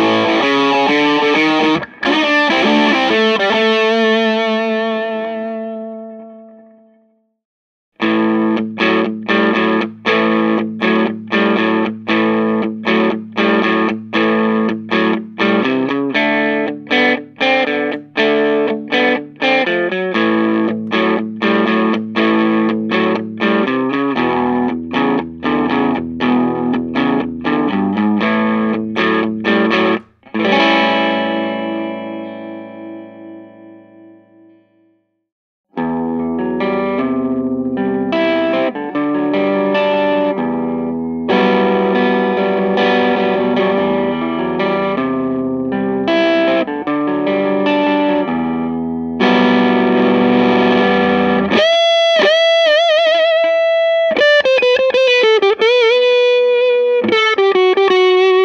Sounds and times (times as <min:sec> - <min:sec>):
Steel guitar, slide guitar: 0:00.0 - 0:06.7, 0:08.0 - 0:34.2, 0:35.8 - 0:58.4.